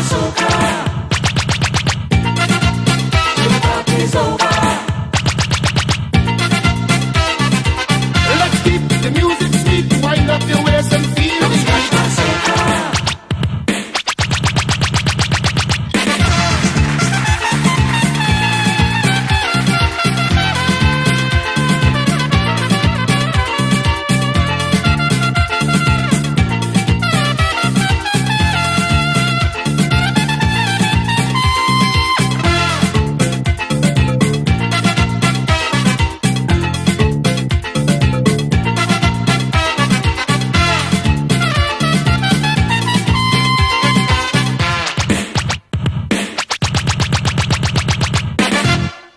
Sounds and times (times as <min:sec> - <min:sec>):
Theme music: 0:00.0 - 0:13.2, 0:15.6 - 0:45.5, 0:48.4 - 0:49.1.